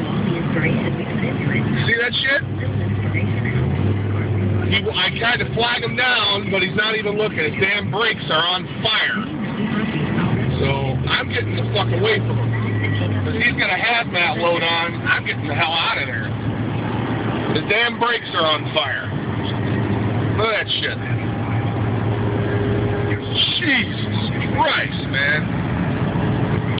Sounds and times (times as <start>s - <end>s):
Car: 0.0s - 26.7s.